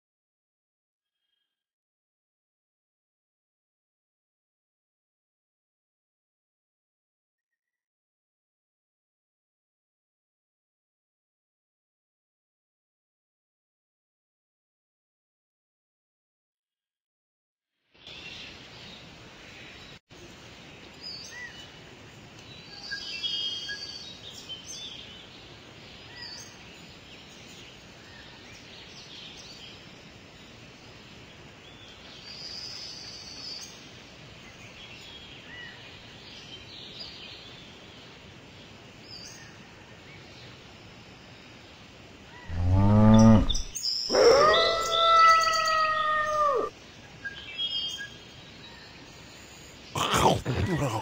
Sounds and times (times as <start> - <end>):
Bird vocalization, bird call, bird song: 1.1 - 1.6, 18.0 - 50.0
Outside, rural or natural: 17.8 - 51.0.